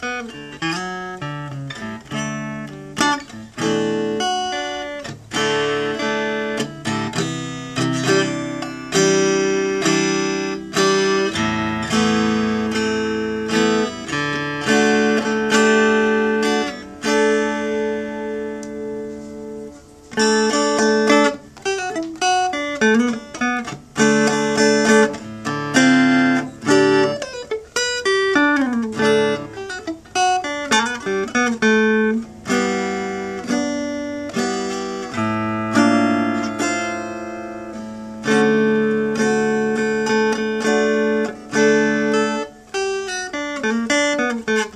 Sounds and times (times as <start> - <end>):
Electric guitar: 0.0 - 44.7
Strum: 0.0 - 44.7.